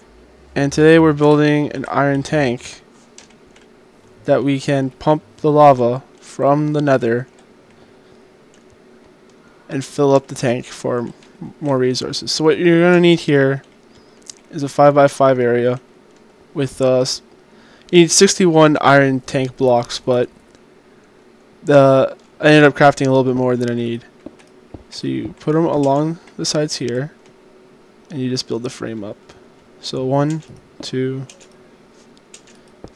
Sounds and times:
Speech: 0.6s - 2.8s, 4.2s - 7.3s, 9.7s - 13.6s, 14.5s - 15.8s, 16.6s - 17.2s, 17.9s - 20.3s, 21.6s - 24.1s, 24.9s - 27.2s, 28.1s - 31.3s.

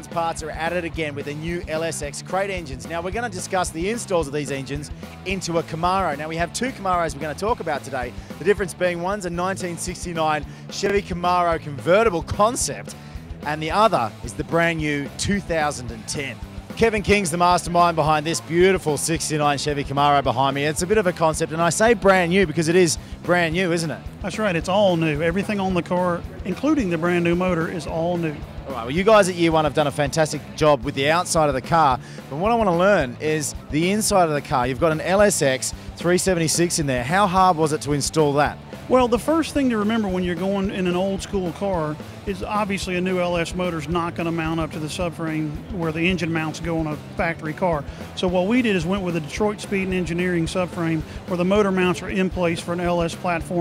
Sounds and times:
Music: 0.0s - 53.6s
Speech: 0.0s - 53.6s.

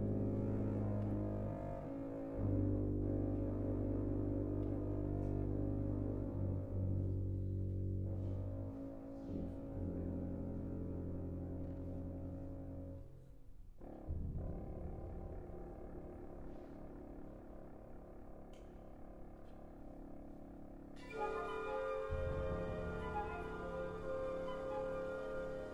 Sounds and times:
Double bass: 0.0s - 19.7s, 21.0s - 25.7s.

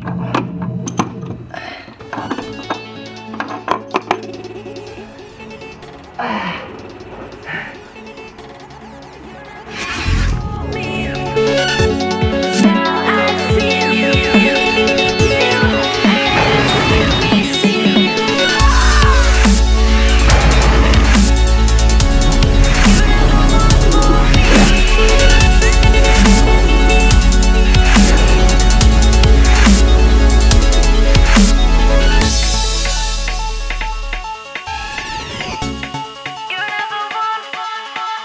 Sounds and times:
Dubstep: 4.7s - 37.0s.

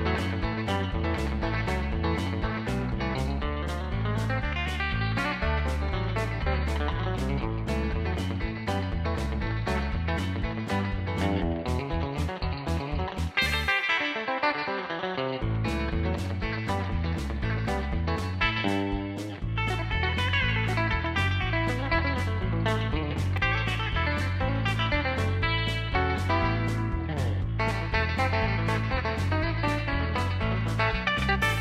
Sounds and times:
Guitar: 0.0s - 31.6s.

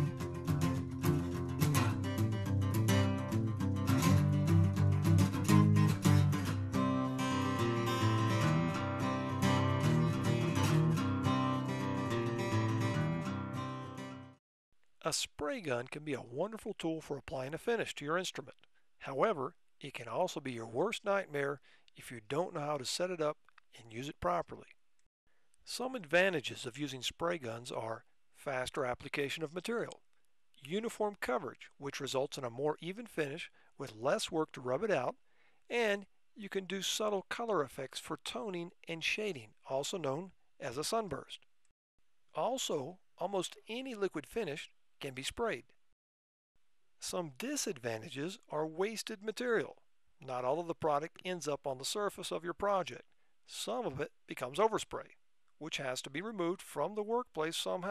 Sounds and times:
Speech: 15.0s - 24.8s, 25.7s - 30.0s, 30.6s - 41.4s, 42.4s - 45.7s, 47.0s - 57.9s.

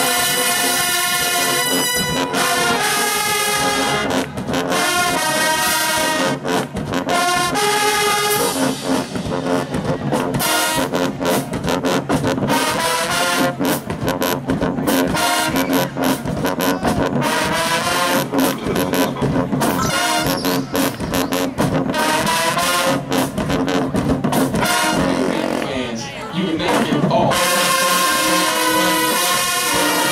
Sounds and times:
Music: 0.0s - 25.7s, 26.6s - 30.1s.

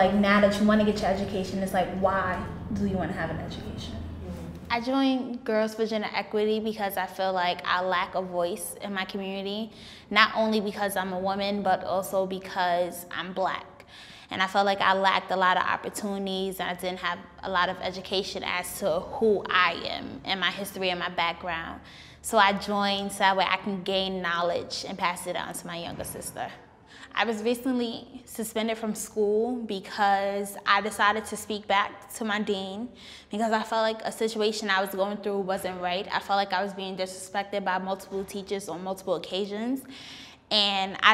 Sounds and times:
Speech: 0.0s - 13.7s, 27.2s - 39.8s.

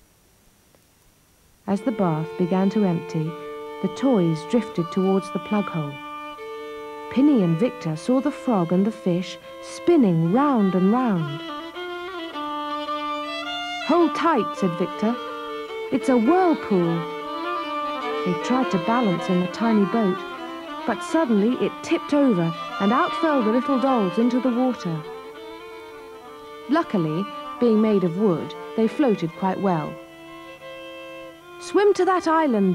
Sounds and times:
Speech: 1.7s - 6.0s, 7.1s - 11.4s, 13.9s - 15.2s, 15.9s - 17.1s, 18.2s - 20.3s, 20.9s - 25.1s, 26.7s - 30.0s, 31.6s - 32.7s
Violin, fiddle: 1.7s - 32.7s.

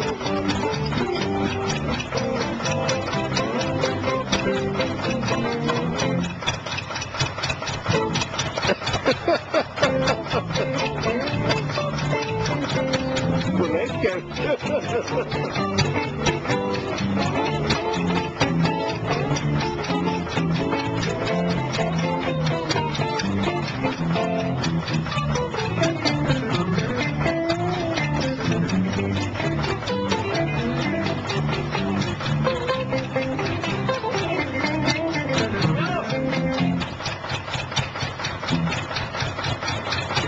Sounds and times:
Happy music: 0.0s - 6.3s, 9.5s - 36.8s
Heavy metal: 0.0s - 40.2s.

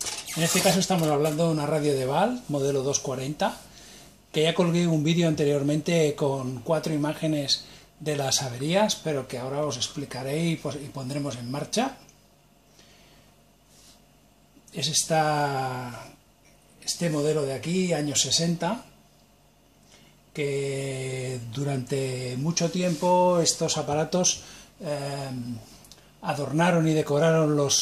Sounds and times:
Speech: 0.3s - 3.7s, 4.3s - 12.1s, 14.7s - 16.2s, 16.8s - 19.0s, 20.4s - 27.8s.

